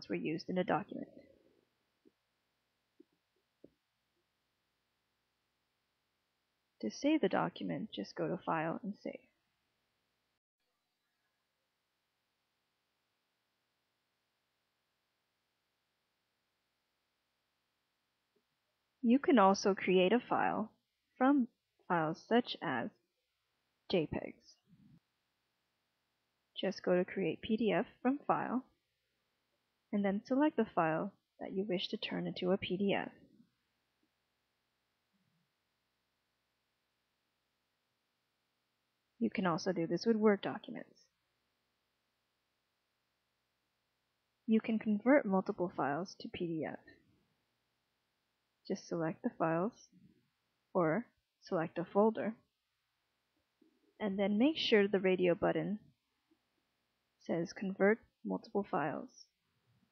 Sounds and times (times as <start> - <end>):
Narration, monologue: 0.0 - 10.4, 17.1 - 59.9.